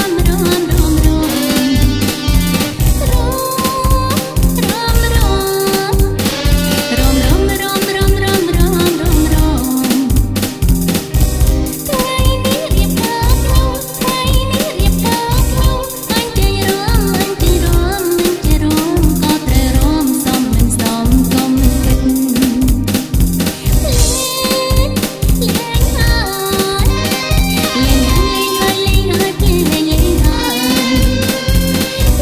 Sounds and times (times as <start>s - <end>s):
Dance music: 0.0s - 32.2s.